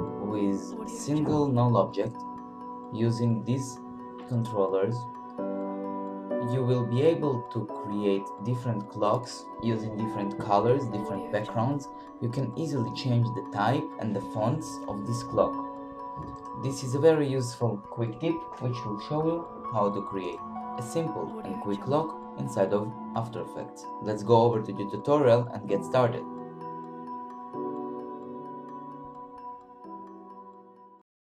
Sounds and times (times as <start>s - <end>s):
Music: 0.0s - 31.0s
Speech: 0.2s - 2.2s, 2.9s - 5.1s, 6.4s - 15.6s, 16.6s - 26.3s.